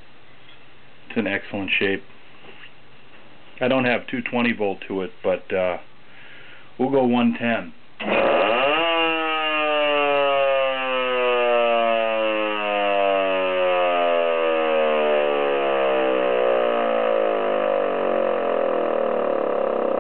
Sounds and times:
Speech: 1.1s - 2.1s, 3.6s - 5.9s, 6.8s - 7.8s
Siren: 8.0s - 20.0s.

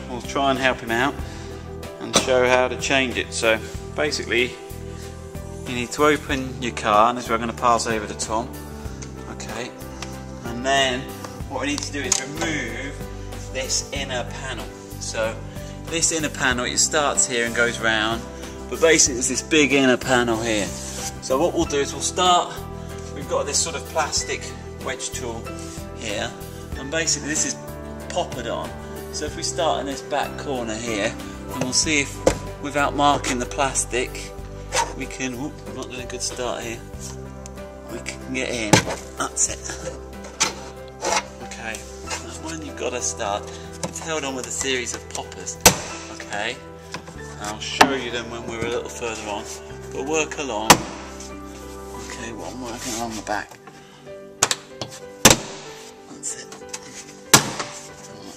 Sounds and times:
Speech: 0.0s - 1.2s, 2.0s - 4.6s, 5.7s - 8.5s, 9.3s - 9.7s, 10.4s - 22.6s, 23.2s - 34.3s, 34.9s - 36.8s, 37.9s - 40.0s, 41.5s - 46.6s, 47.3s - 50.9s, 52.0s - 53.6s, 56.1s - 56.6s
Music: 0.0s - 58.3s.

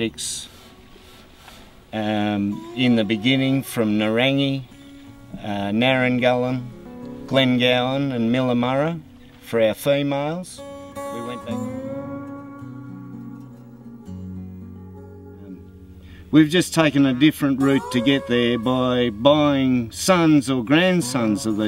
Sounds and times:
Speech: 0.0s - 0.5s, 2.0s - 4.7s, 5.4s - 6.7s, 7.3s - 11.8s, 16.3s - 21.6s
Music: 4.4s - 21.6s.

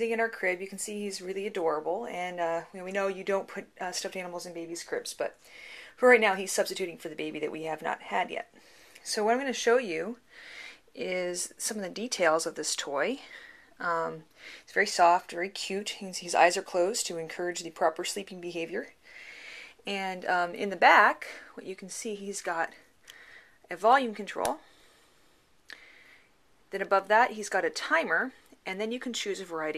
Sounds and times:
Speech: 0.0s - 5.4s, 6.0s - 10.2s, 11.0s - 18.9s, 19.9s - 22.8s, 23.7s - 24.6s, 26.7s - 29.7s.

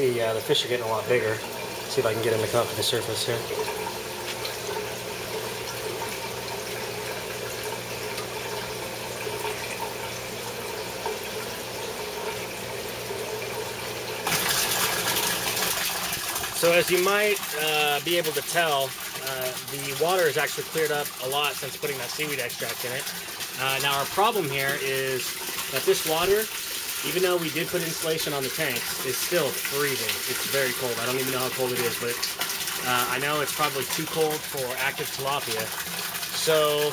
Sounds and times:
Speech: 0.0s - 3.7s, 16.6s - 32.2s, 32.8s - 36.9s
Fill (with liquid): 0.0s - 36.9s
Water: 0.0s - 36.9s.

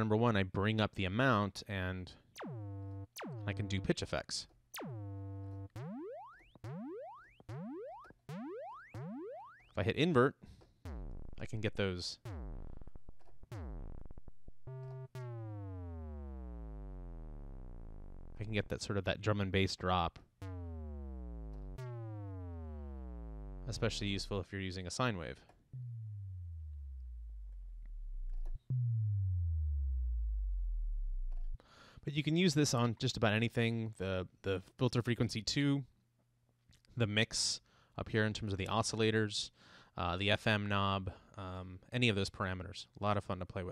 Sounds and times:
Speech: 0.0s - 2.2s, 3.5s - 4.6s, 9.8s - 10.4s, 11.4s - 12.2s, 18.4s - 20.2s, 23.7s - 25.5s, 32.1s - 35.9s, 37.0s - 43.7s.

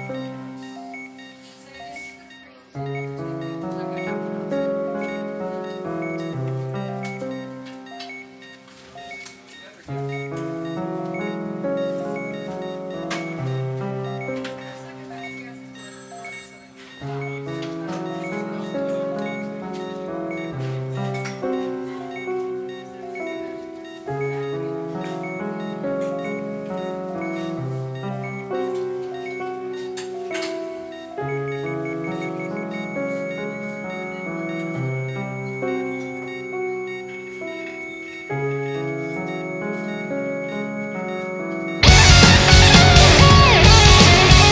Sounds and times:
Music: 0.0s - 44.5s.

